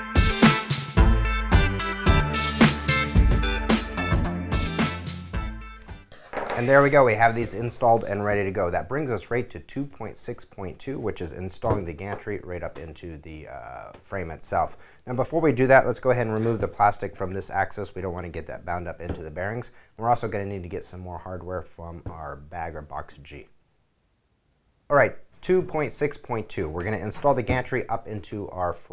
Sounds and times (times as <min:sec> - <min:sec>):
Speech: 0:06.5 - 0:23.6, 0:24.9 - 0:28.9.